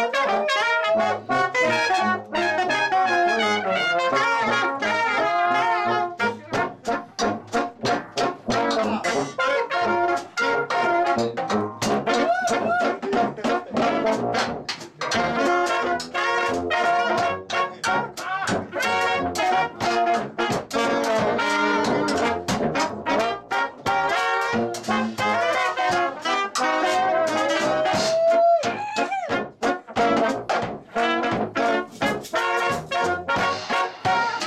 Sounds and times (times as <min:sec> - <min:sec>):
Orchestra: 0:00.0 - 0:34.4.